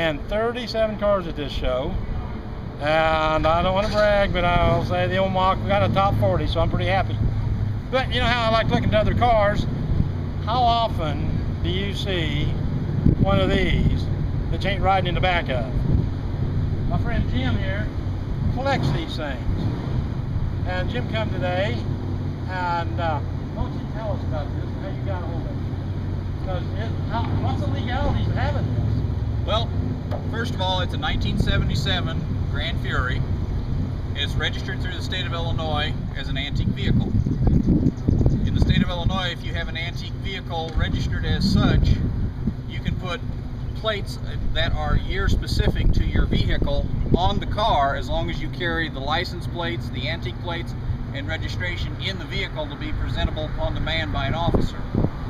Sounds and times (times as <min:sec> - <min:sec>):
Speech: 0:00.0 - 0:02.0, 0:02.8 - 0:07.2, 0:07.9 - 0:09.7, 0:10.4 - 0:12.6, 0:13.2 - 0:15.8, 0:16.9 - 0:17.9, 0:18.6 - 0:19.5, 0:20.6 - 0:21.9, 0:22.5 - 0:25.6, 0:26.4 - 0:29.7, 0:30.3 - 0:33.2, 0:34.2 - 0:37.1, 0:38.5 - 0:42.0, 0:42.7 - 0:43.2, 0:43.8 - 0:54.9.